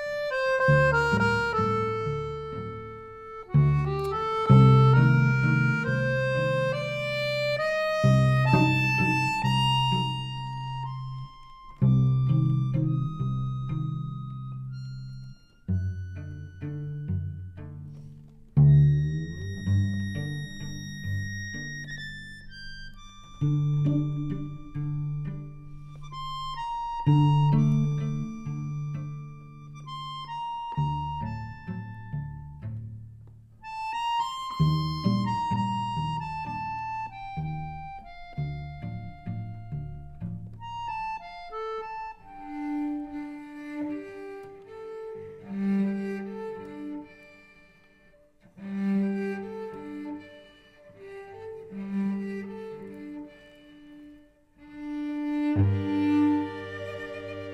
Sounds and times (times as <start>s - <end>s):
Musical instrument: 0.0s - 31.7s, 54.8s - 57.5s.